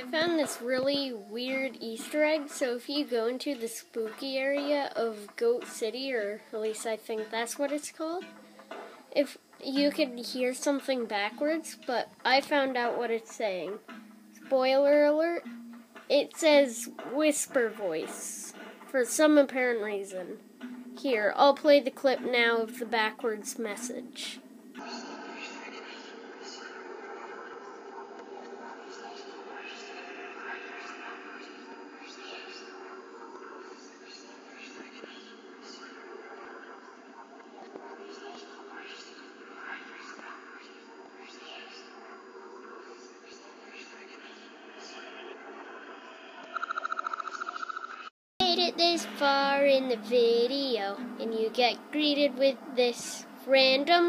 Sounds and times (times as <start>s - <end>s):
Speech: 0.0s - 8.2s, 9.2s - 13.8s, 14.5s - 15.4s, 16.1s - 20.4s, 21.0s - 24.4s, 48.4s - 54.0s
Television: 0.0s - 54.0s.